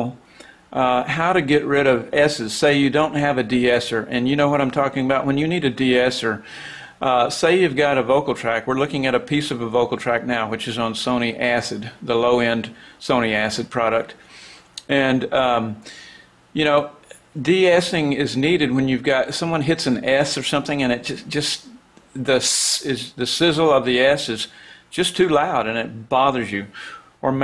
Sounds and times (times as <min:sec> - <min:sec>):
Speech: 0:00.0 - 0:06.4, 0:07.0 - 0:14.2, 0:14.8 - 0:15.8, 0:16.6 - 0:27.4.